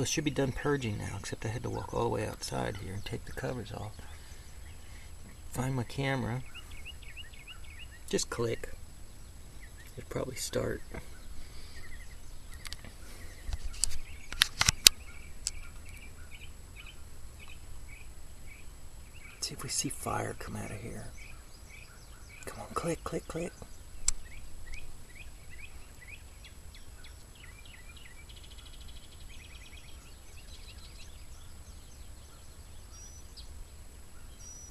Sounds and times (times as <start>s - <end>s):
Speech: 0.0s - 4.1s, 5.5s - 6.5s, 8.1s - 8.8s, 9.9s - 11.0s, 19.4s - 21.2s, 22.4s - 23.7s
Bird vocalization, bird call, bird song: 0.0s - 34.7s
Environmental noise: 0.0s - 34.7s.